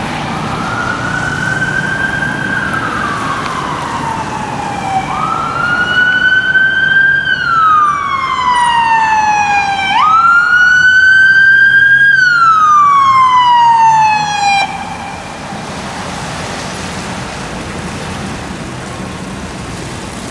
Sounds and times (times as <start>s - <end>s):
Car: 0.0s - 20.3s
Emergency vehicle: 0.0s - 20.3s.